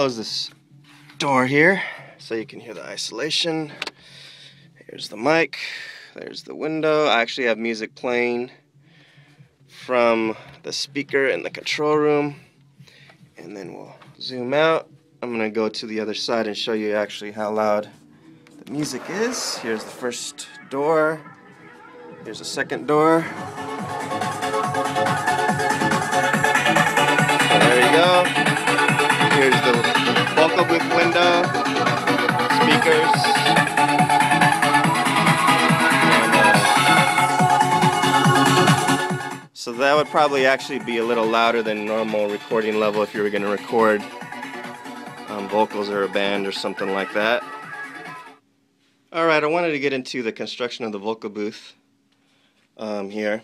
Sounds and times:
Speech: 0.0s - 0.5s, 1.2s - 3.8s, 4.8s - 8.6s, 9.8s - 12.4s, 13.4s - 17.9s, 18.6s - 21.2s, 22.2s - 23.3s, 27.5s - 28.3s, 29.2s - 31.5s, 32.6s - 33.4s, 36.1s - 36.8s, 39.6s - 44.1s, 45.3s - 47.5s, 49.1s - 51.8s, 52.8s - 53.4s.

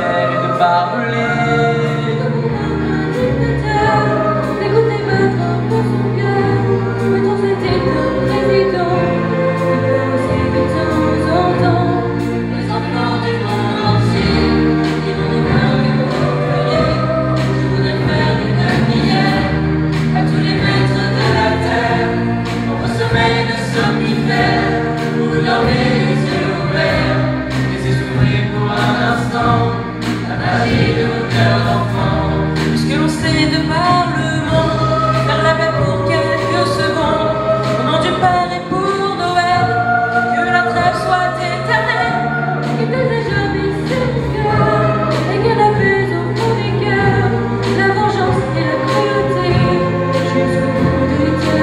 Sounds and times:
Choir: 0.0s - 51.6s.

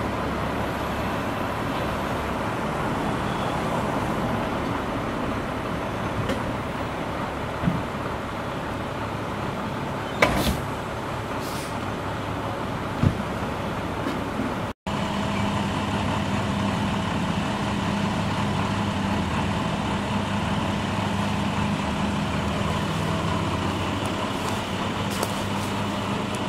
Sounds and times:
Car: 0.0s - 26.4s.

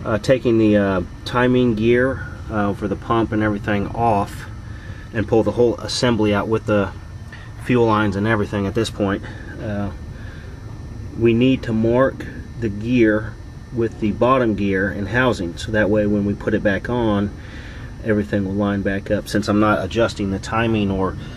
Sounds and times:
Speech: 0.0s - 4.5s, 5.2s - 7.0s, 7.6s - 10.0s, 11.2s - 17.4s, 18.0s - 21.2s.

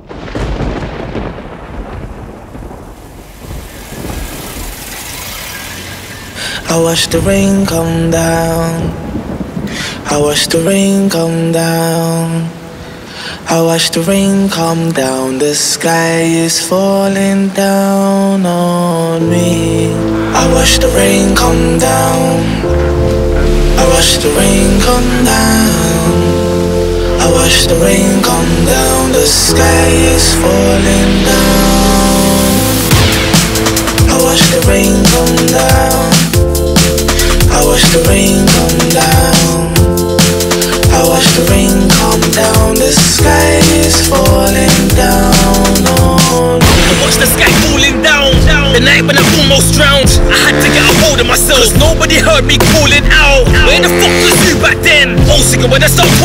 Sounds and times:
Hip hop music: 5.1s - 9.1s, 13.4s - 56.2s
Drum and bass: 20.4s - 56.2s.

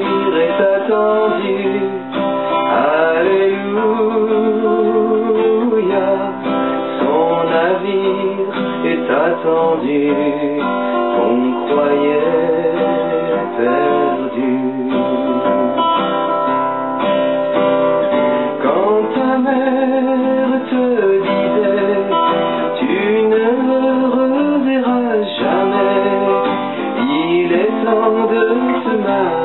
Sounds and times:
Music: 0.0s - 29.4s.

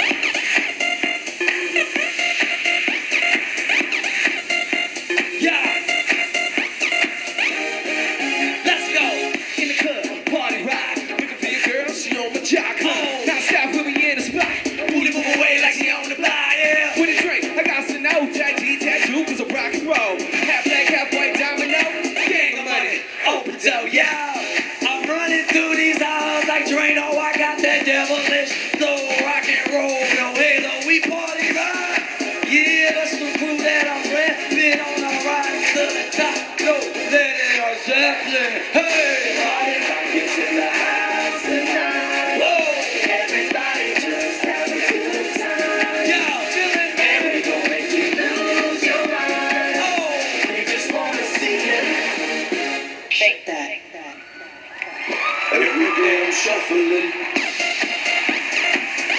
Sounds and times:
Rock and roll: 0.0s - 53.0s, 55.0s - 59.1s.

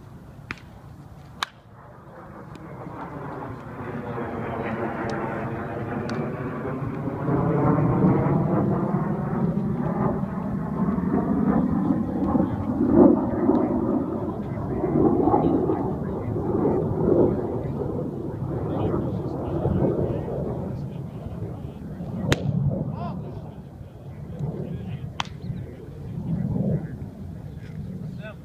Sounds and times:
Speech: 14.0s - 28.4s.

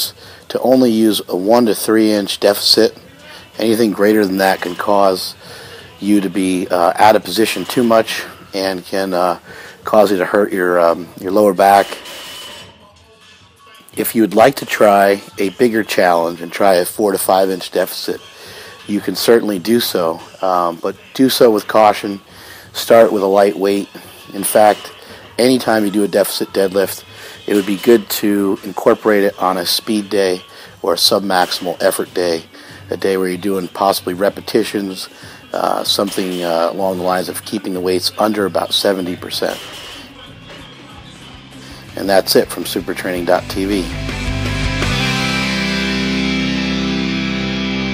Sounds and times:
Speech: 0.0s - 5.4s, 6.0s - 12.0s, 13.9s - 18.2s, 18.9s - 22.2s, 22.8s - 39.7s, 41.9s - 43.9s.

